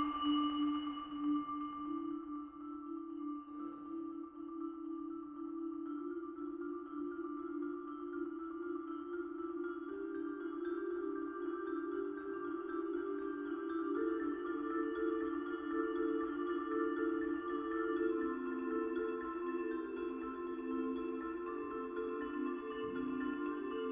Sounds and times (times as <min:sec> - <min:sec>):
Percussion: 0:00.0 - 0:23.9.